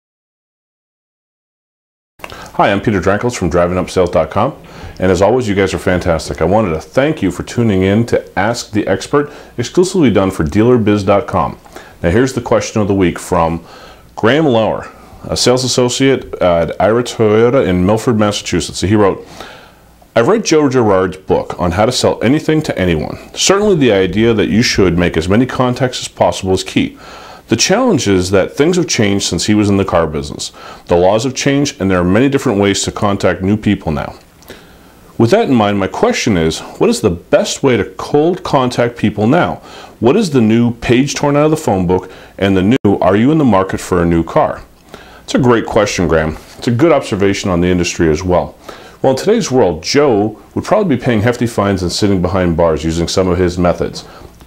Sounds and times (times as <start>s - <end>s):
Speech: 2.4s - 19.3s, 20.1s - 34.2s, 35.2s - 44.7s, 45.3s - 54.4s.